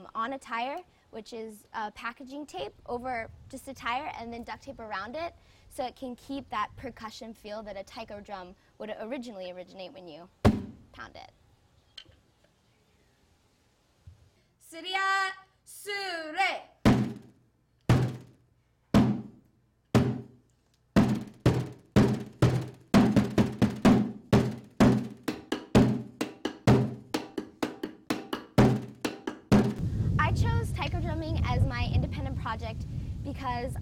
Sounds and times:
Speech: 0.0 - 10.3, 11.0 - 11.4, 30.2 - 33.8.

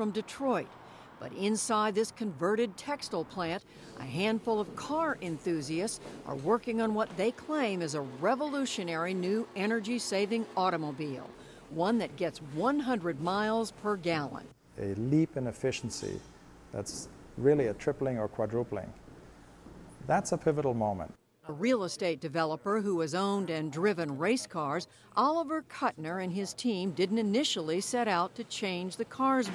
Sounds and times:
Speech: 0.0 - 19.0, 20.0 - 29.5.

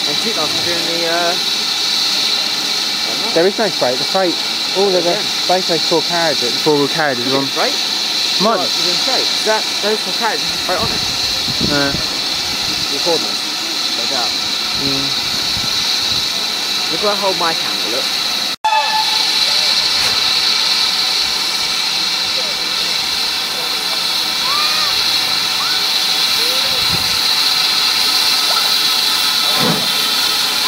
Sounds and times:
Railroad car, train wagon: 0.0 - 30.6
Train whistle: 18.7 - 20.1.

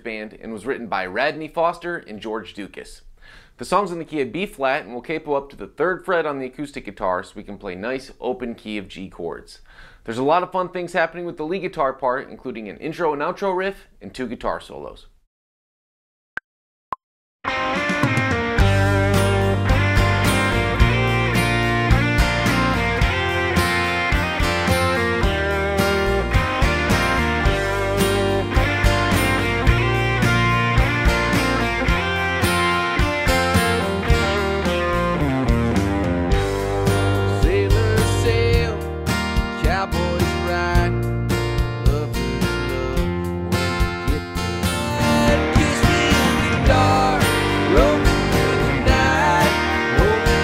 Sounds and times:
Acoustic guitar: 17.5 - 50.4
Electric guitar: 17.5 - 50.4
Strum: 17.6 - 40.2, 41.0 - 50.4.

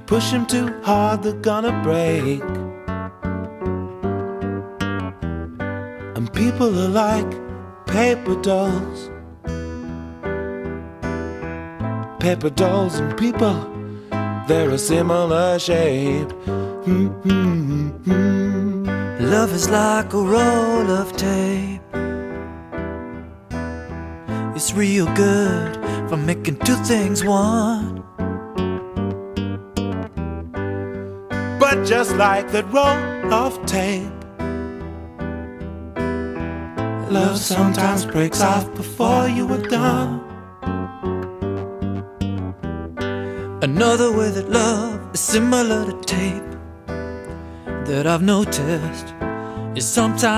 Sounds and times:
Music: 0.0 - 50.3.

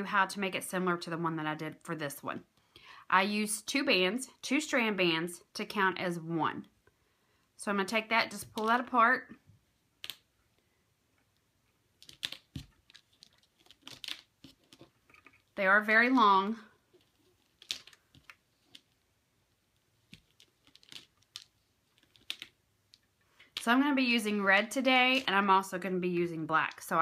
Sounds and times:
Speech: 0.0 - 2.4, 3.1 - 6.7, 7.6 - 9.4, 15.6 - 16.7, 23.6 - 27.0.

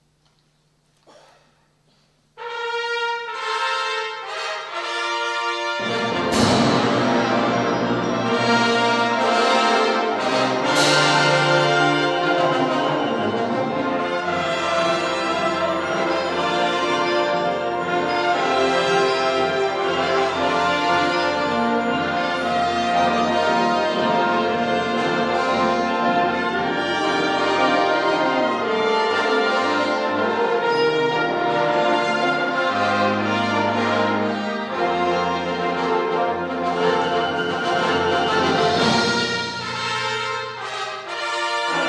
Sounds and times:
Music: 0.0 - 41.8.

